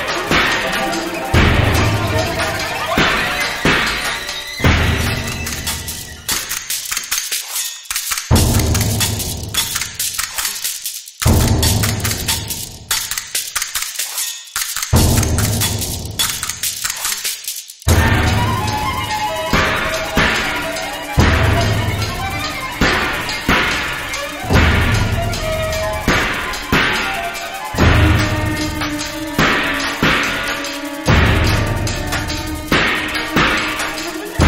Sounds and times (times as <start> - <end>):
Music: 0.0 - 34.4.